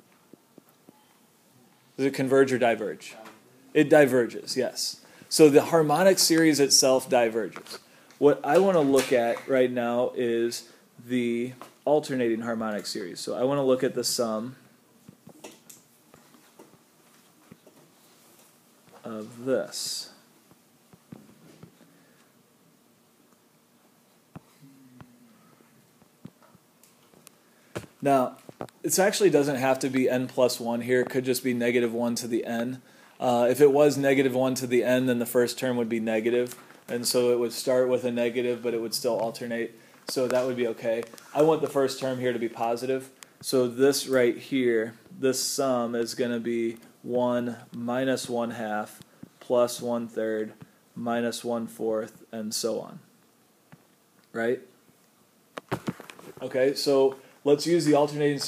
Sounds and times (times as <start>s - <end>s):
Speech: 2.0s - 14.6s, 19.0s - 20.2s, 28.0s - 53.1s, 54.3s - 54.7s, 56.4s - 58.4s.